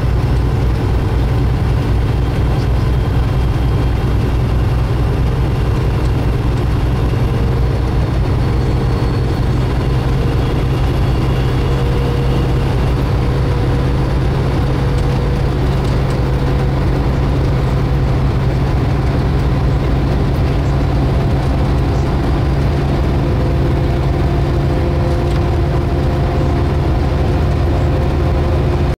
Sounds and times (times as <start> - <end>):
Truck: 0.0 - 28.9.